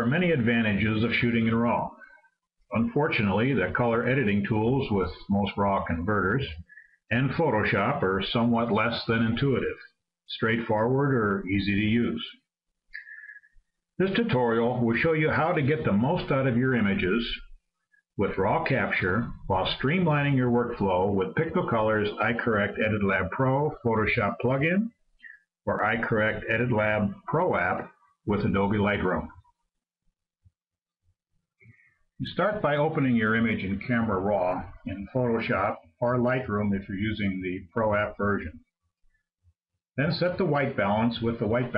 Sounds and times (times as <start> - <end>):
Speech: 0.0 - 2.1, 2.7 - 13.4, 14.0 - 17.5, 18.2 - 29.4, 32.2 - 38.7, 40.0 - 41.7.